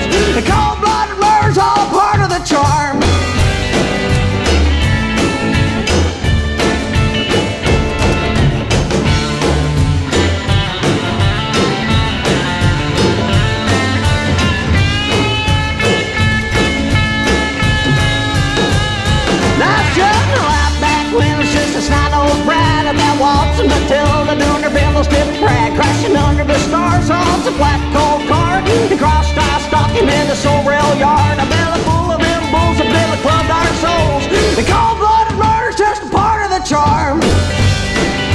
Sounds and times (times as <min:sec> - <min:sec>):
Psychedelic rock: 0:00.0 - 0:38.3
Singing: 0:19.5 - 0:37.2.